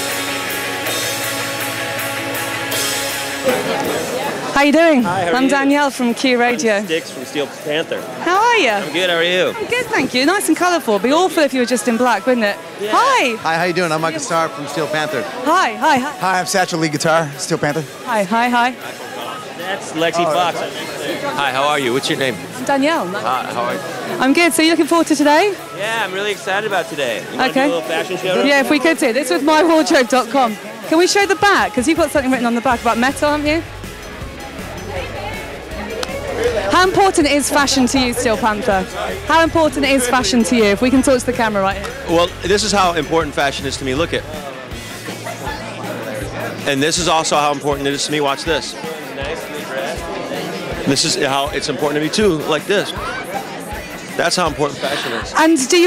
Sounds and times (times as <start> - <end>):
Music: 0.0 - 55.8.